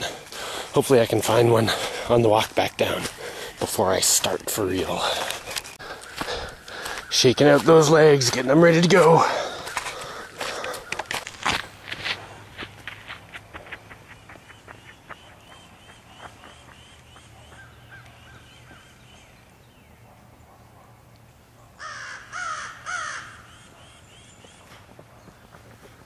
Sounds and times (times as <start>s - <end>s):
Walk, footsteps: 2.4s - 7.8s, 9.6s - 15.2s.